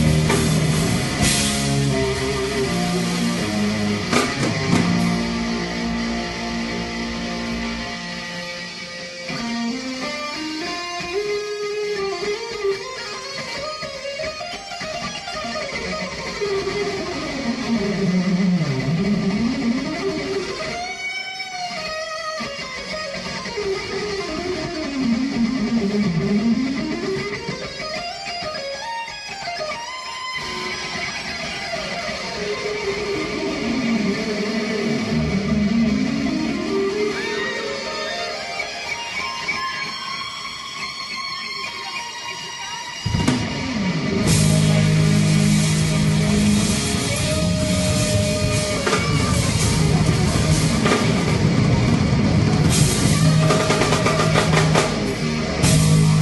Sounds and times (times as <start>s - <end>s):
Guitar: 0.0s - 56.2s.